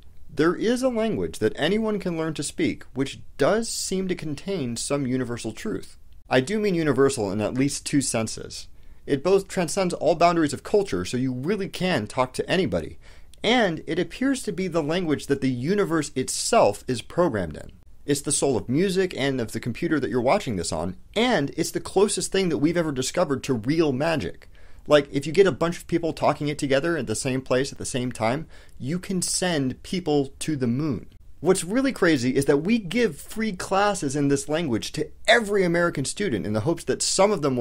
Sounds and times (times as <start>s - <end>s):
Speech: 0.3s - 37.6s.